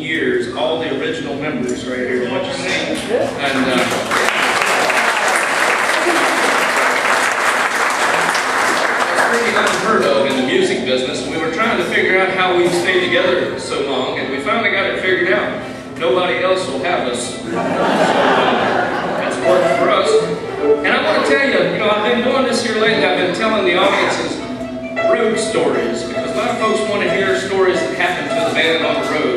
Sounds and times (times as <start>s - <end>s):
Speech: 0.0s - 4.0s, 9.1s - 17.6s, 18.2s - 29.3s
Music: 7.9s - 17.9s, 19.0s - 29.3s.